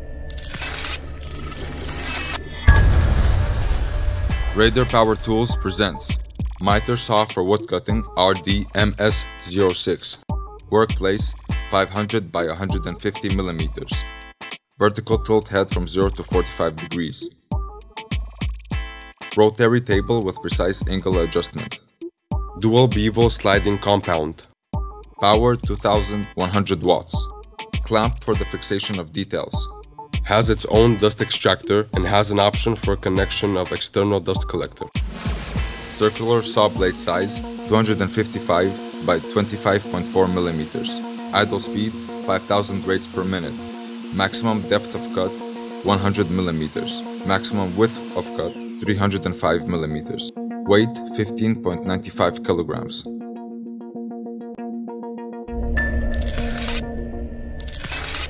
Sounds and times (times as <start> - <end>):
Music: 0.0 - 58.3
Speech: 4.6 - 14.1, 14.8 - 17.4, 19.3 - 21.8, 22.6 - 24.5, 25.2 - 34.9, 35.9 - 43.6, 44.2 - 53.1.